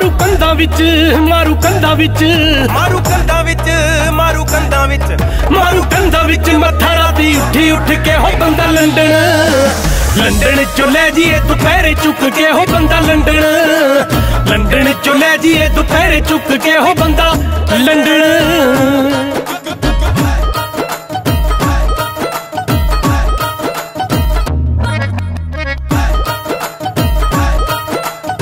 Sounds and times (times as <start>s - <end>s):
Singing: 0.0s - 22.2s, 25.9s - 28.4s
Music: 0.0s - 28.4s.